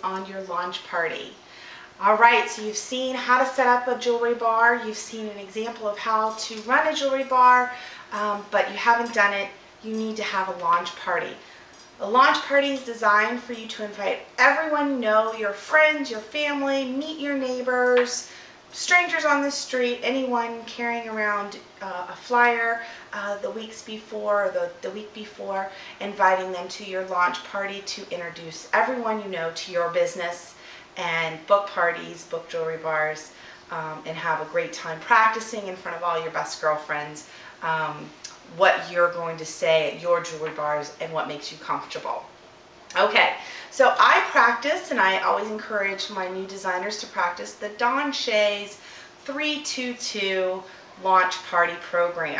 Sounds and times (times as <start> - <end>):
Speech: 0.0 - 1.4, 2.0 - 11.4, 12.0 - 42.3, 42.9 - 52.3.